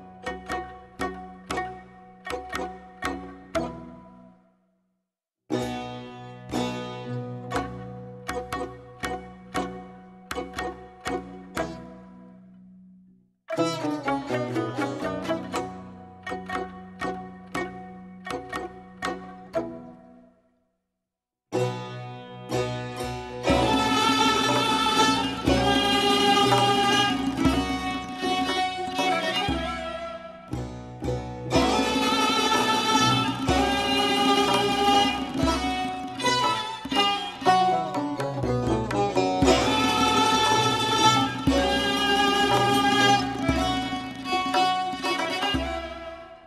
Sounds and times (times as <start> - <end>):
Music: 0.0 - 4.9, 5.5 - 20.8, 21.5 - 46.4.